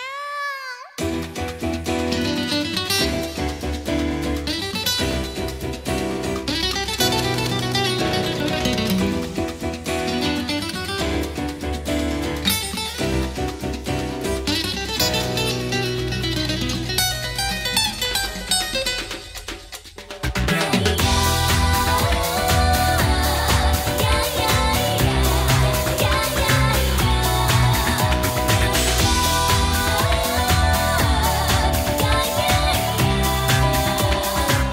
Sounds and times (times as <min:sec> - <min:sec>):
Music: 0:00.9 - 0:34.7.